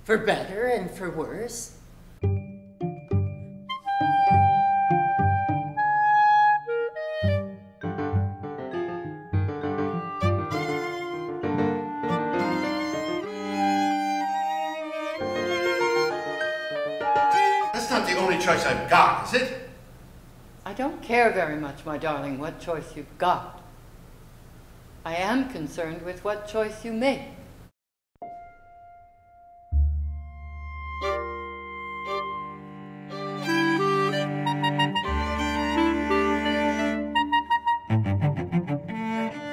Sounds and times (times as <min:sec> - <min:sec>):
Speech: 0:00.0 - 0:01.8, 0:17.4 - 0:19.8, 0:20.7 - 0:23.6, 0:25.1 - 0:27.4.